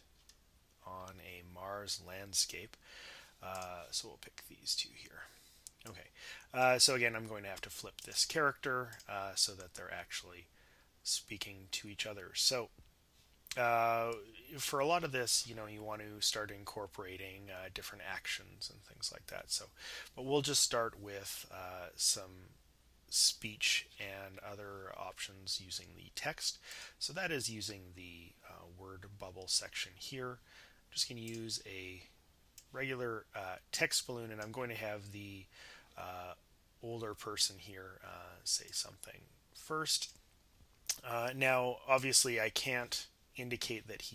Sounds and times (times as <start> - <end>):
Speech: 0.8 - 2.8, 3.4 - 12.7, 13.5 - 30.4, 31.0 - 40.2, 40.9 - 44.1.